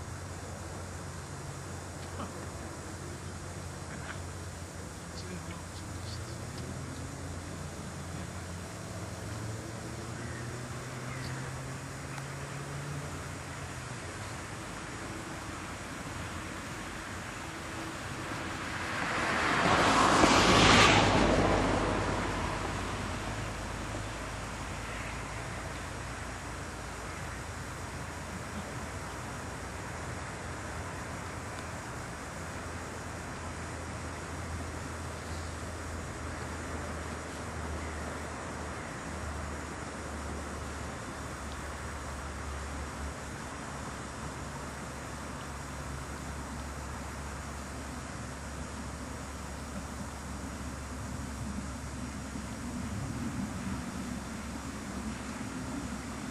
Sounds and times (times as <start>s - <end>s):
Speech: 5.1s - 7.1s.